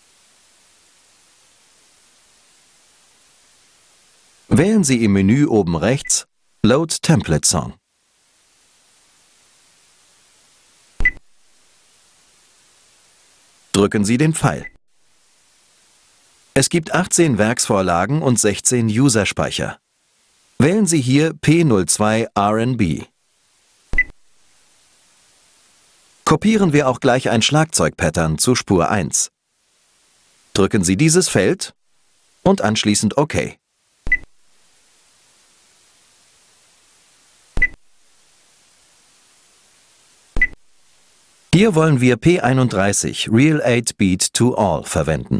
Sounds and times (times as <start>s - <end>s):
Speech: 4.5s - 7.8s, 13.7s - 14.8s, 16.6s - 19.8s, 20.6s - 23.1s, 26.3s - 29.3s, 30.6s - 31.8s, 32.4s - 33.6s, 41.6s - 45.3s.